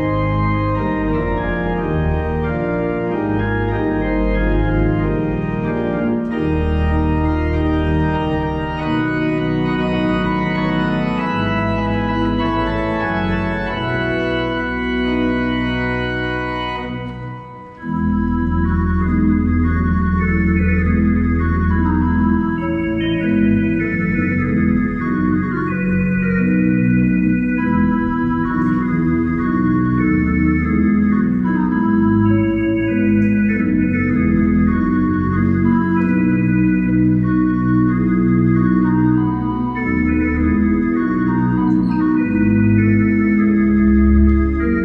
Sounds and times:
Hammond organ: 0.0 - 44.8.

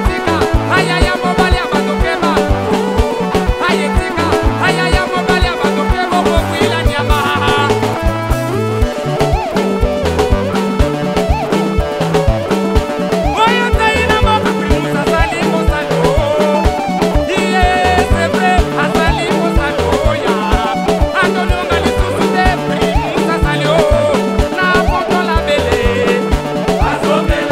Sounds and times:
Music: 0.0 - 27.5.

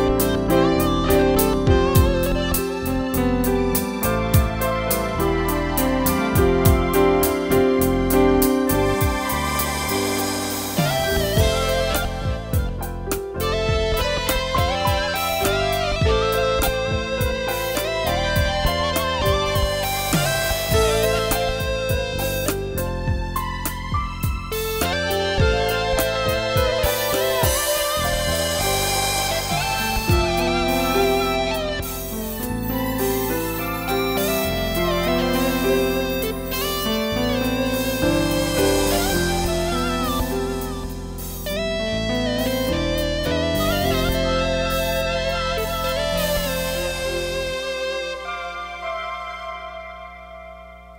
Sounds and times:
Piano: 0.0 - 50.9.

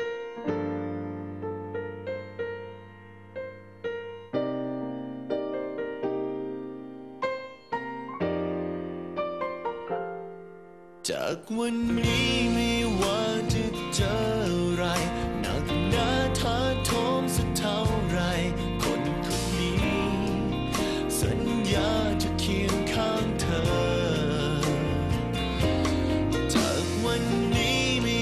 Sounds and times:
Piano: 0.0 - 28.2.

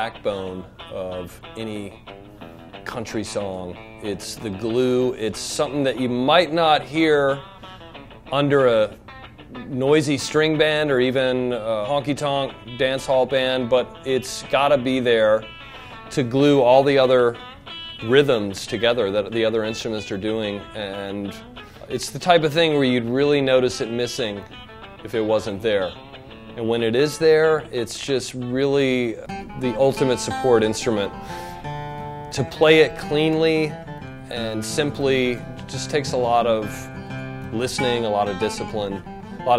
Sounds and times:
Speech: 0.0 - 2.0, 2.8 - 7.4, 8.3 - 9.0, 9.6 - 15.5, 16.1 - 17.4, 18.0 - 26.0, 26.6 - 31.2, 32.3 - 33.7, 34.3 - 36.9, 37.5 - 39.5
Electric guitar: 0.0 - 39.5.

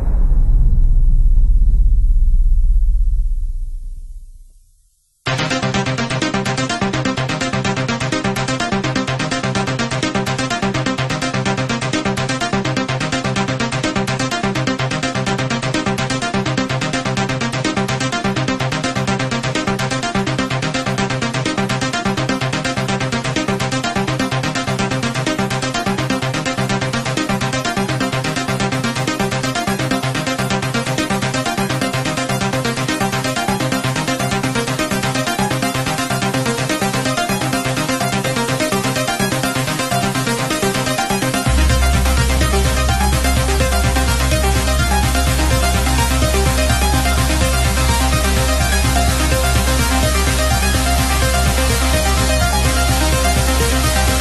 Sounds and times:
Electronic dance music: 5.3 - 54.2.

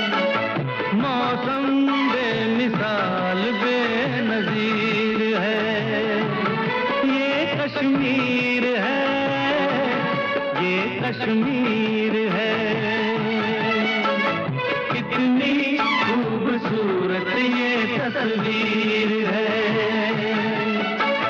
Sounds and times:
Music of Bollywood: 0.0 - 21.2.

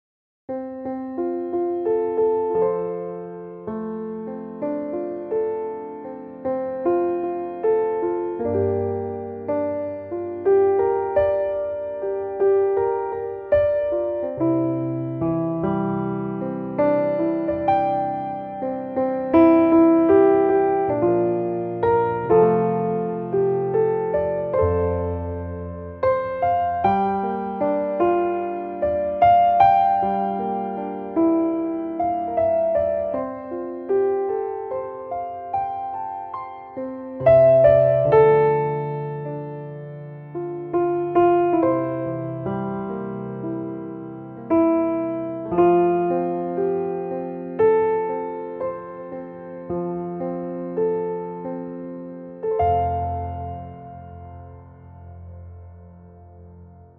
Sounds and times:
Music: 0.5 - 56.9.

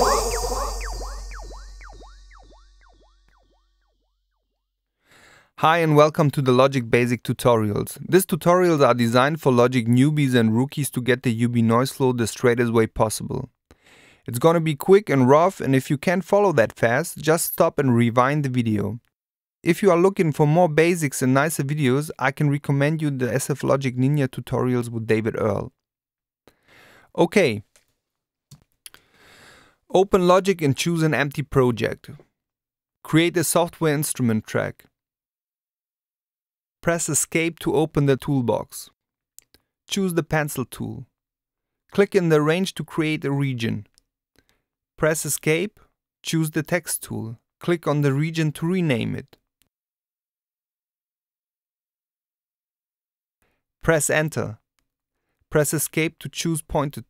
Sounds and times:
Speech: 5.6 - 13.6, 14.3 - 25.8, 27.2 - 27.7, 29.9 - 32.2, 33.0 - 34.9, 36.8 - 39.0, 39.9 - 41.1, 41.9 - 43.9, 45.0 - 49.4, 53.8 - 54.6, 55.5 - 57.0.

